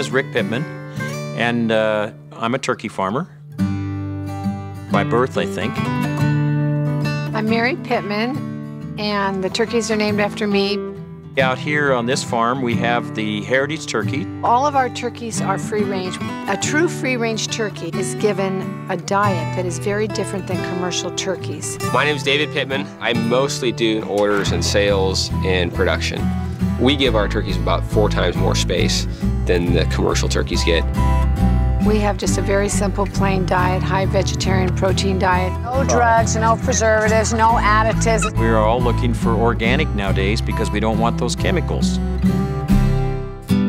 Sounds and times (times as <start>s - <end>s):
Speech: 0.0s - 0.7s, 1.4s - 3.3s, 4.9s - 5.8s, 11.4s - 19.8s, 20.7s - 26.2s, 26.8s - 30.8s, 31.9s - 42.0s
Music: 0.0s - 43.6s.